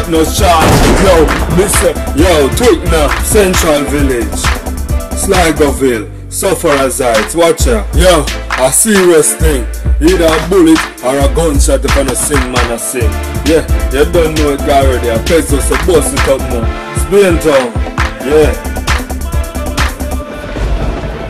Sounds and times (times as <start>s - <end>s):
Speech: 0.0s - 4.5s, 5.2s - 18.6s
Music: 0.0s - 21.3s.